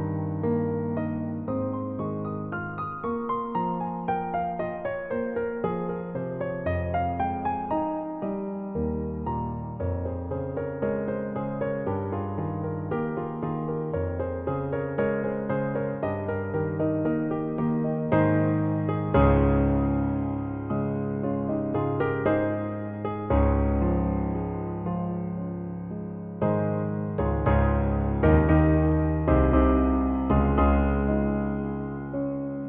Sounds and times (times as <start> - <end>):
Music: 0.0 - 32.6.